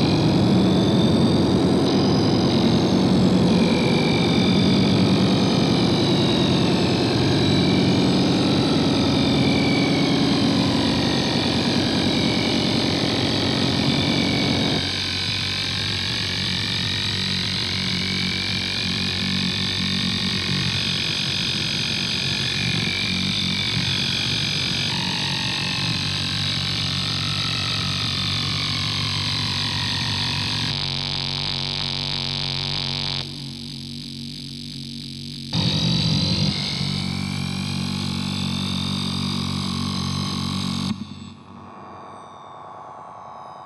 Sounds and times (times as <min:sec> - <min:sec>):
Distortion: 0:00.0 - 0:43.6
Effects unit: 0:00.0 - 0:43.6.